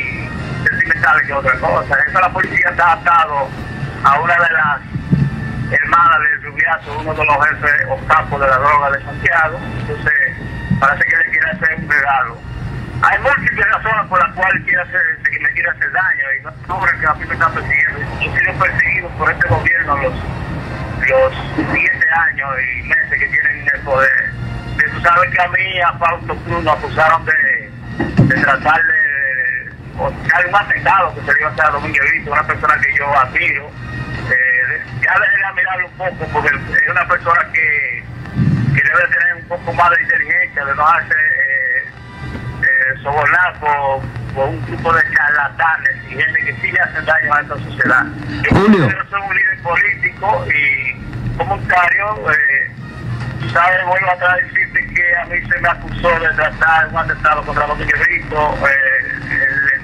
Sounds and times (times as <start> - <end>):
Radio: 0.0 - 4.8, 5.7 - 12.4, 13.0 - 20.2, 21.0 - 38.1, 38.7 - 42.0, 42.6 - 52.5, 53.4 - 59.8
Speech: 0.0 - 4.8, 5.7 - 12.4, 13.0 - 20.2, 21.0 - 27.7, 28.3 - 38.0, 38.8 - 42.0, 42.6 - 52.8, 53.4 - 59.8
Music: 0.0 - 59.8.